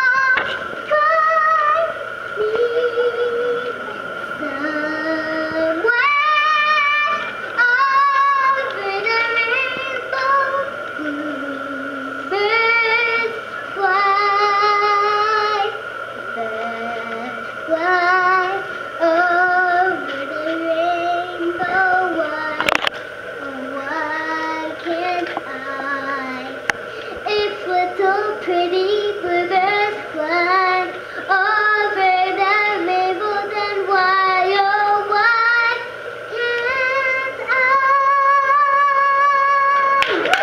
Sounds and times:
Child singing: 0.0s - 15.8s, 16.4s - 22.7s, 23.4s - 26.6s, 27.2s - 40.0s
Vocal music: 0.0s - 40.4s.

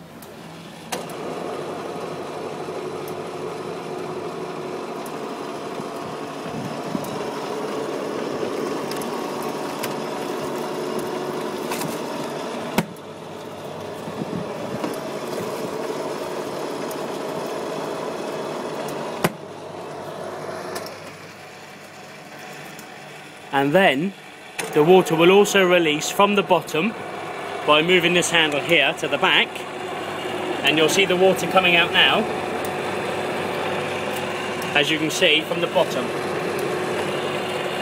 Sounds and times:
Speech: 23.5s - 27.0s, 27.7s - 29.6s, 30.6s - 32.3s, 34.8s - 36.1s.

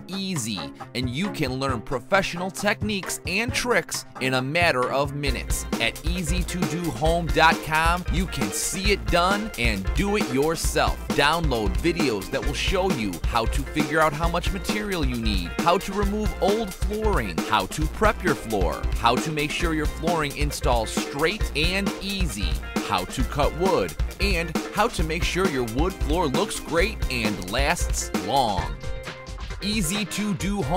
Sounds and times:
Speech: 0.0s - 28.8s, 29.6s - 30.7s
Music: 0.0s - 30.7s.

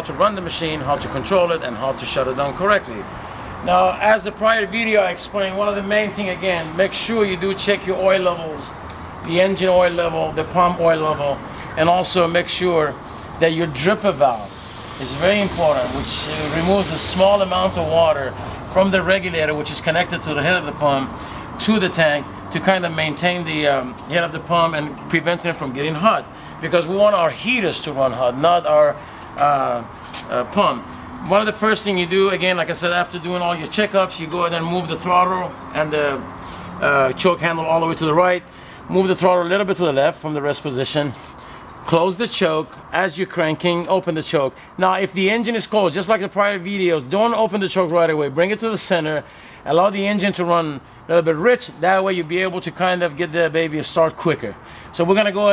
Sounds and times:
Speech: 0.0s - 41.2s, 41.9s - 55.5s
Vehicle: 0.0s - 55.5s.

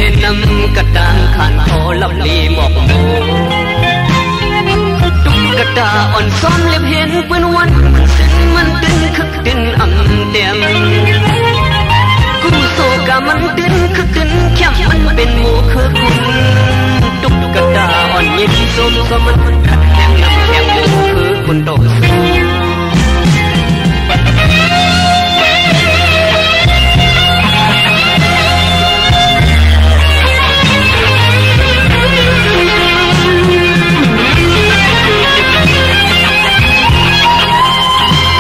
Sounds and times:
Music of Bollywood: 0.0s - 38.4s.

